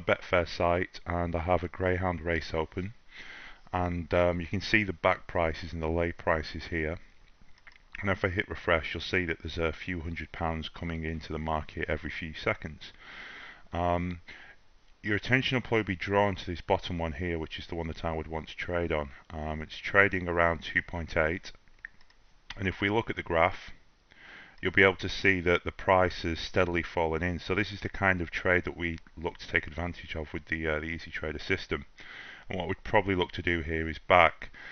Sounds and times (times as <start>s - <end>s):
Speech: 0.0s - 3.0s, 3.7s - 7.0s, 8.0s - 13.0s, 13.7s - 14.2s, 15.0s - 21.6s, 22.5s - 23.8s, 24.6s - 31.9s, 32.5s - 34.5s.